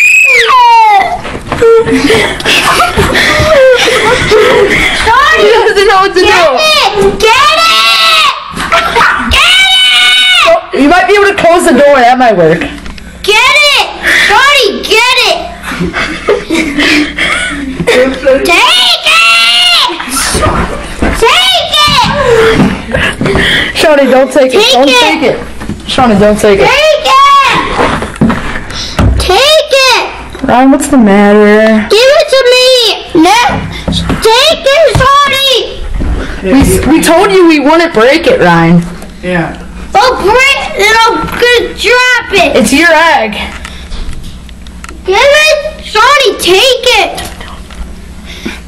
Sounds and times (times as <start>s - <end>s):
Screaming: 0.0s - 1.2s, 7.4s - 8.4s, 9.0s - 10.6s.